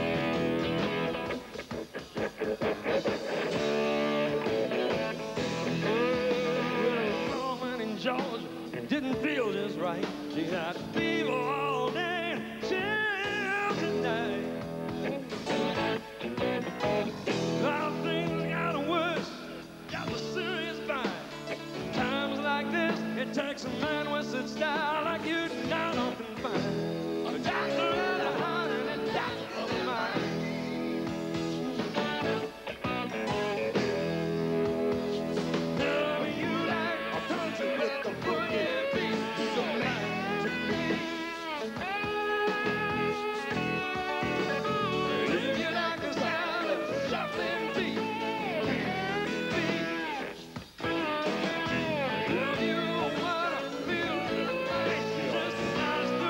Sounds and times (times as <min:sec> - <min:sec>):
Rock and roll: 0:00.0 - 0:56.2.